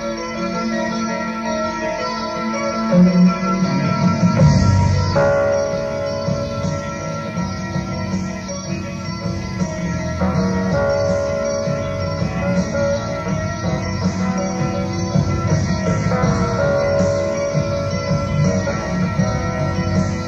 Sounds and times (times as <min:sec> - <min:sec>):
Progressive rock: 0:00.0 - 0:20.2.